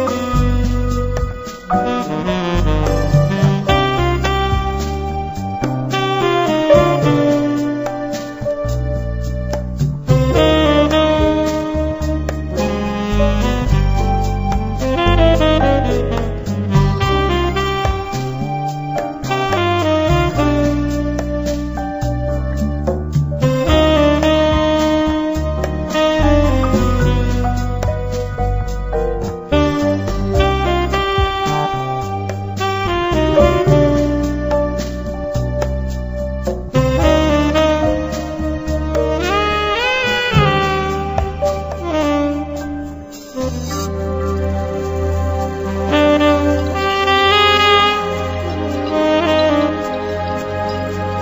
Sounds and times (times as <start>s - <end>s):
Music: 0.0s - 51.2s.